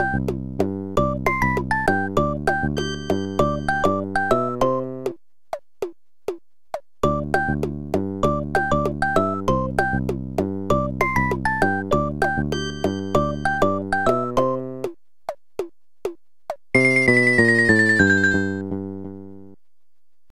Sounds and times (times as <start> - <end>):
Video game music: 0.0 - 5.2, 7.0 - 14.9, 16.8 - 19.6.